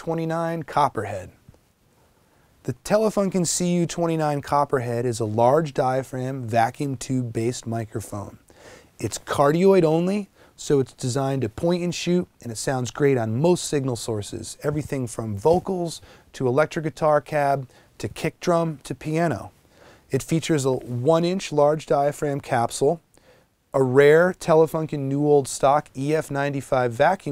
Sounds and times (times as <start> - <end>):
Speech: 0.0 - 1.4, 2.6 - 23.1, 23.7 - 27.3.